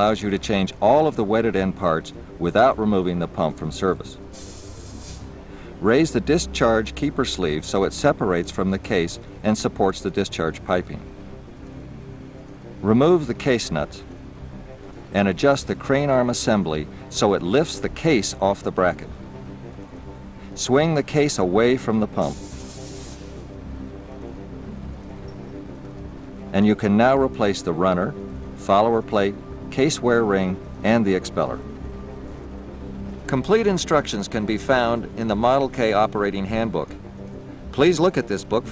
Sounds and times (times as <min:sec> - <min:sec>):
Speech: 0:00.0 - 0:04.2, 0:05.8 - 0:11.0, 0:12.8 - 0:14.0, 0:15.2 - 0:19.1, 0:20.6 - 0:22.4, 0:26.5 - 0:31.6, 0:33.3 - 0:37.0, 0:37.8 - 0:38.7
Music: 0:00.0 - 0:38.7.